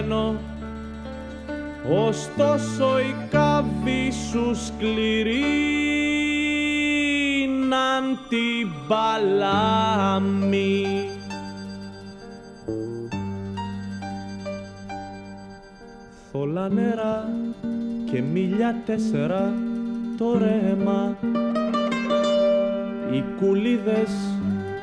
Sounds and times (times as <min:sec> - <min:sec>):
Music: 0:00.0 - 0:24.8.